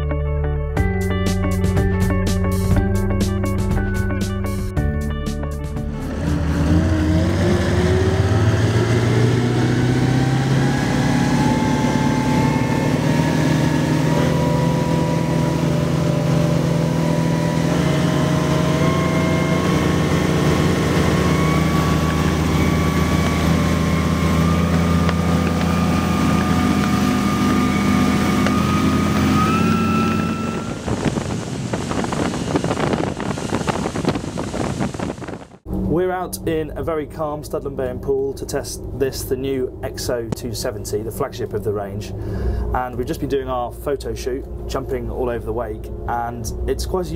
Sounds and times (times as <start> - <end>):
Motorboat, speedboat: 5.8 - 36.4
Speech: 35.9 - 47.1.